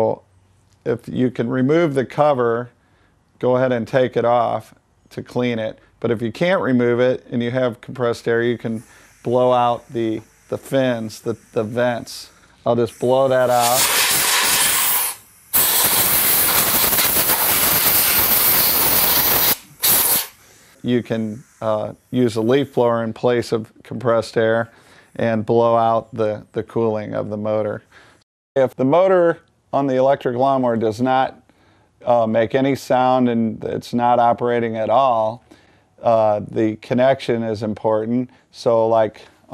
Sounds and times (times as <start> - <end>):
Speech: 0.0 - 0.2, 0.8 - 2.8, 3.4 - 13.9, 20.8 - 27.9, 28.6 - 31.4, 32.0 - 35.4, 36.0 - 39.5
Steam: 8.4 - 23.0.